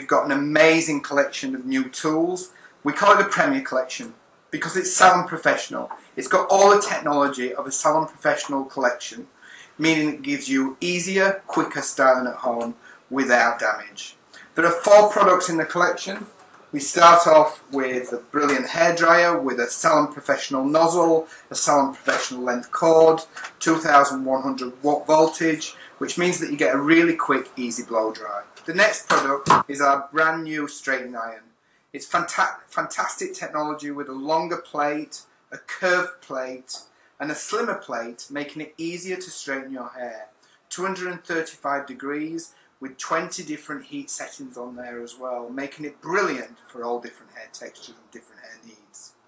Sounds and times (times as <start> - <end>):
Speech: 0.0 - 49.2.